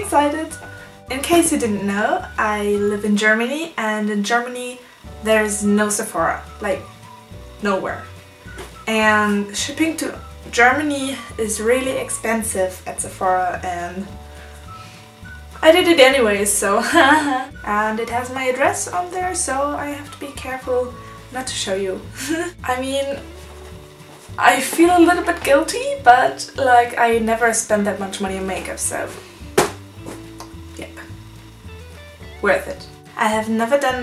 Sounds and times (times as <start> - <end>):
Speech: 0.0 - 6.8, 7.6 - 8.1, 8.9 - 14.1, 15.6 - 23.2, 24.4 - 29.2, 32.4 - 34.0
Music: 0.0 - 34.0.